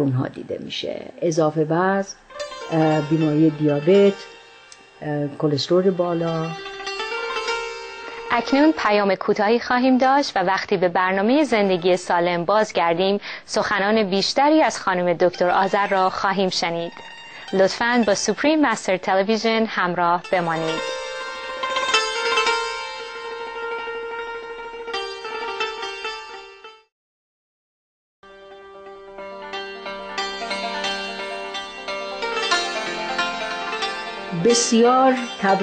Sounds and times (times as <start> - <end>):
Sitar: 0.0 - 26.9, 28.2 - 35.6.